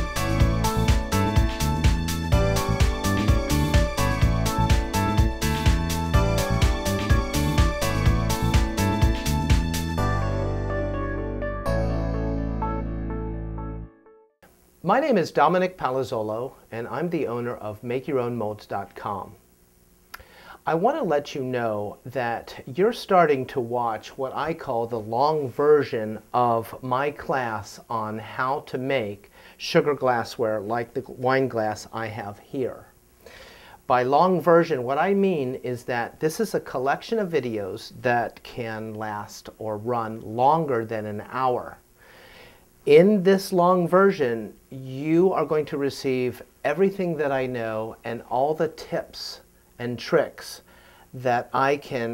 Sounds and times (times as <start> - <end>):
Speech: 14.8 - 19.4, 20.6 - 32.9, 33.9 - 41.8, 42.9 - 50.6, 51.2 - 52.1.